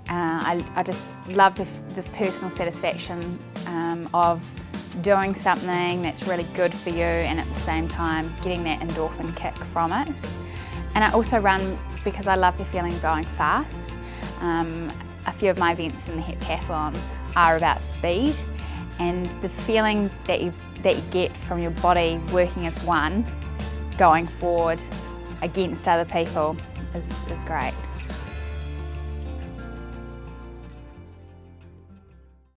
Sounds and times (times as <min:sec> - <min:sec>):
Music: 0:00.0 - 0:32.5
Speech: 0:00.1 - 0:04.4, 0:05.0 - 0:10.1, 0:11.0 - 0:18.4, 0:24.0 - 0:27.8.